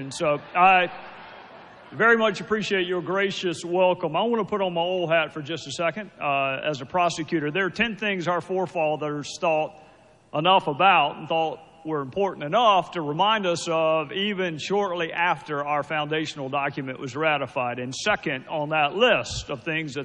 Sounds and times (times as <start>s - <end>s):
Male speech, man speaking: 0.0s - 0.9s, 2.0s - 9.7s, 10.4s - 20.0s
Narration, monologue: 0.0s - 20.0s.